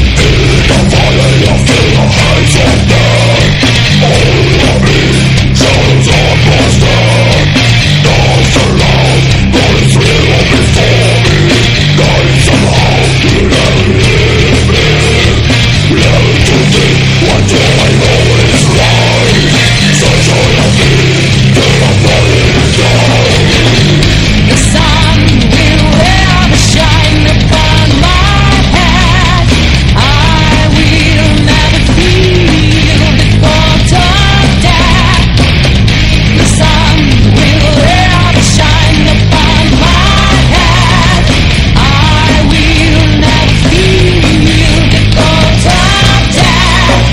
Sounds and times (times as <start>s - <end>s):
Music: 0.0s - 47.1s.